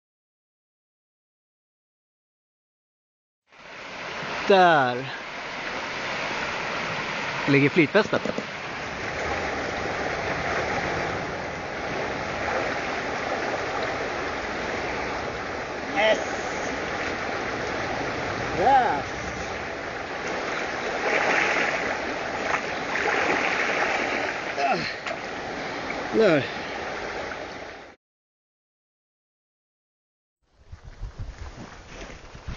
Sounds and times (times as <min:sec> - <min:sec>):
Speech: 0:04.5 - 0:05.2, 0:07.5 - 0:08.3, 0:18.6 - 0:19.1, 0:26.1 - 0:26.5.